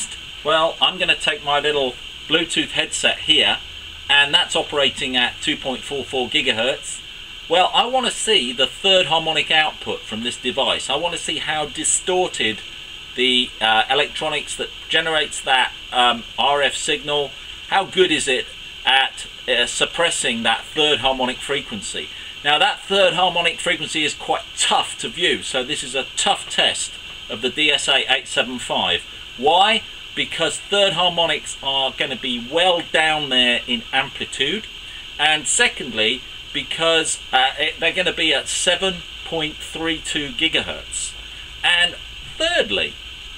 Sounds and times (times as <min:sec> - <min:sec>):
Speech: 0:00.0 - 0:12.6, 0:13.2 - 0:43.0.